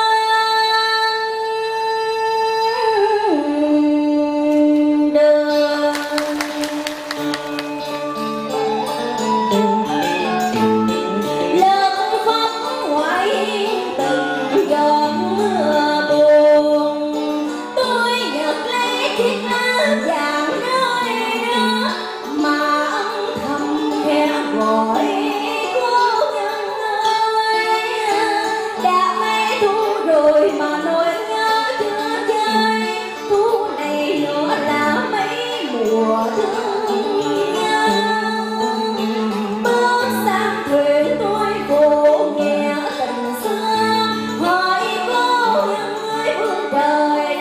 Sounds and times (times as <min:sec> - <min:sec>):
Female singing: 0:00.0 - 0:07.3, 0:11.5 - 0:47.4
Music: 0:00.0 - 0:47.4.